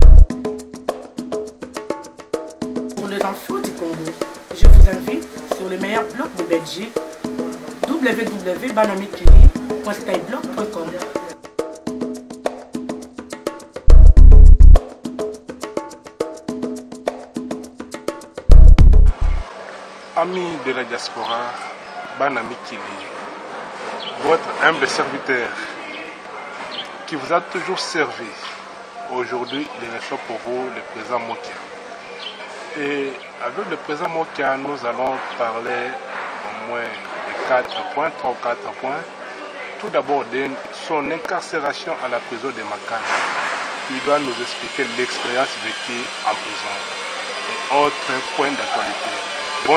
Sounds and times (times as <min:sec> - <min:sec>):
Speech: 0:03.0 - 0:07.0, 0:07.8 - 0:11.3, 0:20.2 - 0:23.2, 0:24.2 - 0:26.2, 0:27.1 - 0:31.7, 0:32.6 - 0:43.1, 0:43.9 - 0:46.9, 0:47.6 - 0:49.7.